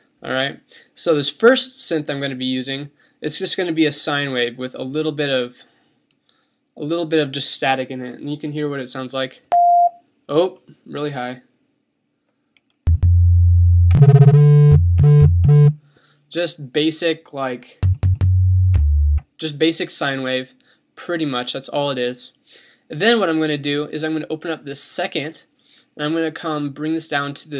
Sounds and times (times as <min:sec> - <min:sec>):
Speech: 0:00.2 - 0:05.7, 0:06.8 - 0:09.5, 0:10.3 - 0:11.5, 0:16.3 - 0:17.8, 0:19.4 - 0:27.5.